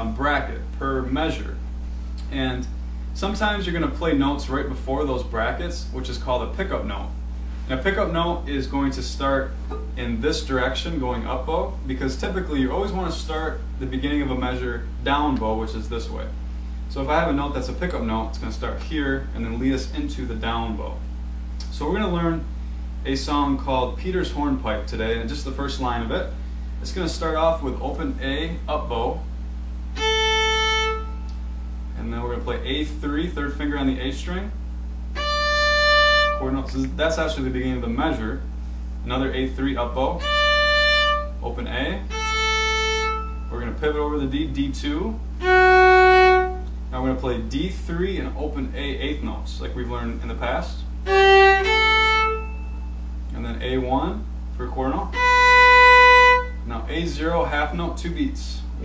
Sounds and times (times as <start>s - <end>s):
Speech: 0.0s - 1.6s, 2.2s - 21.0s, 21.6s - 29.3s, 32.0s - 34.6s, 36.3s - 40.2s, 41.3s - 42.1s, 43.5s - 45.2s, 46.9s - 51.0s, 53.3s - 55.2s, 56.6s - 58.8s.